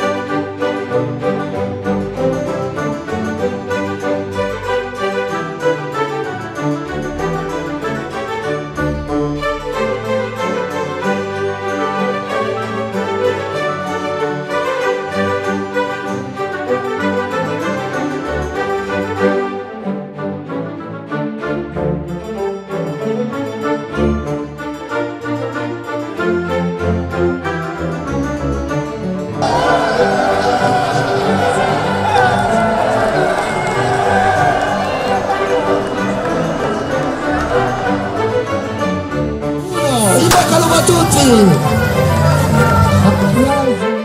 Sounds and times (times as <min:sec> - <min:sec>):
Music: 0:00.0 - 0:44.0
Run: 0:29.4 - 0:38.6.